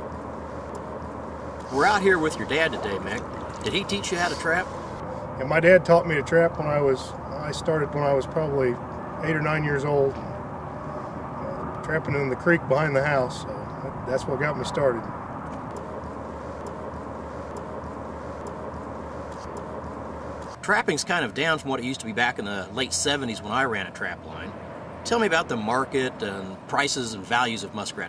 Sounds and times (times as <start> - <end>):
Outside, rural or natural: 0.0 - 28.0
Speech: 1.7 - 4.7, 5.4 - 10.2, 11.4 - 15.1, 20.6 - 24.5, 25.1 - 28.0.